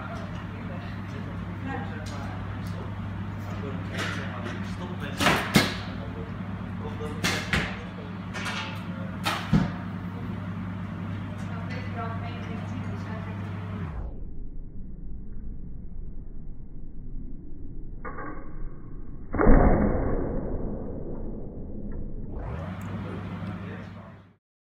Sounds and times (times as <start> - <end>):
Speech: 0.0 - 9.2, 11.2 - 13.5, 22.9 - 24.4
Arrow: 5.2 - 6.0, 7.1 - 7.8, 9.2 - 9.8, 18.1 - 18.4, 19.3 - 21.2.